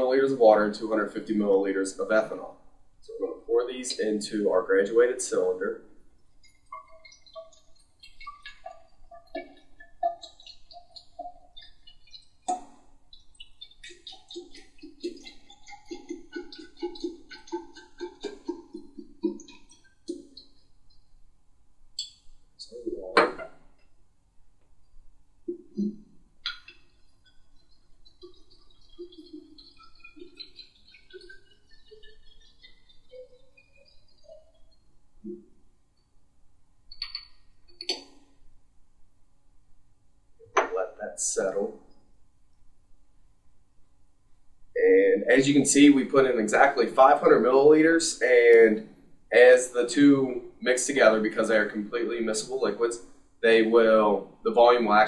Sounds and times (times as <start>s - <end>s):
Gurgling: 13.6s - 20.4s.